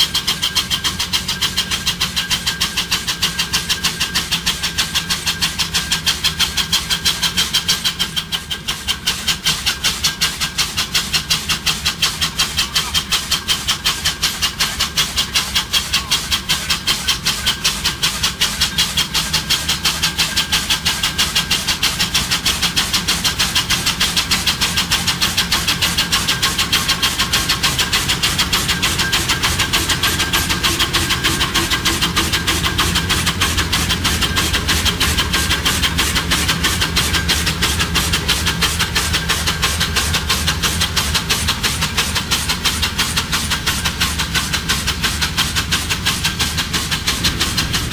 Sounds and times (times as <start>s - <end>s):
Hiss: 0.0s - 47.9s.